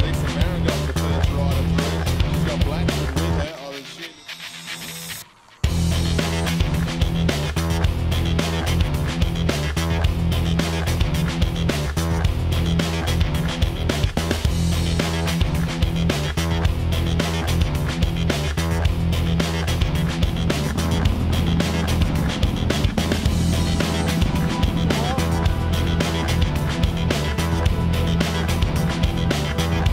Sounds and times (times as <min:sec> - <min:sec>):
Music: 0:00.0 - 0:29.9.